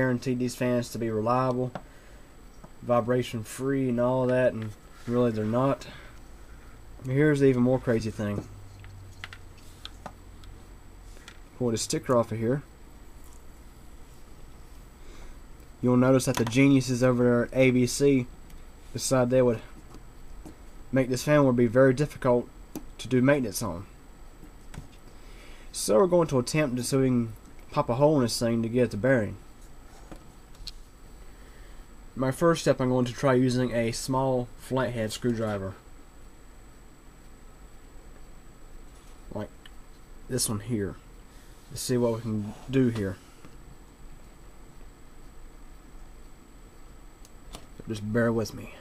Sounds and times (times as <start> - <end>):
Speech: 0.0 - 1.8, 2.8 - 6.0, 7.0 - 8.5, 11.6 - 12.7, 15.8 - 18.3, 18.9 - 19.7, 20.9 - 23.9, 25.7 - 29.4, 32.2 - 35.8, 39.3 - 39.6, 40.3 - 41.1, 41.7 - 43.3, 47.8 - 48.8.